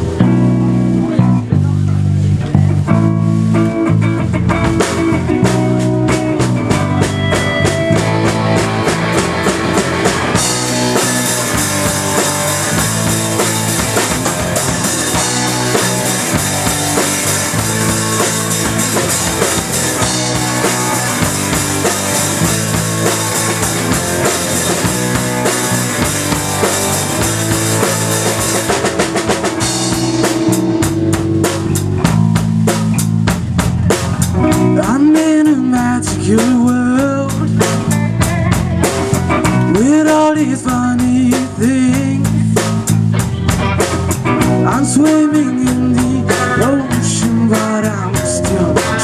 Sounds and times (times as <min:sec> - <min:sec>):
Music: 0:00.0 - 0:49.0
Speech: 0:00.4 - 0:03.0.